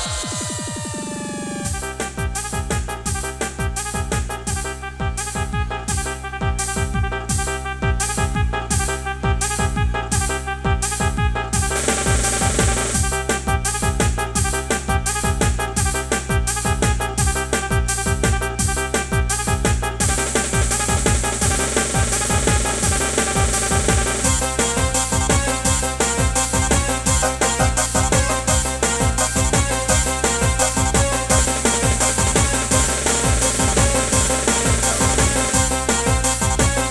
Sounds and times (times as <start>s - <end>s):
Theme music: 0.0s - 36.9s.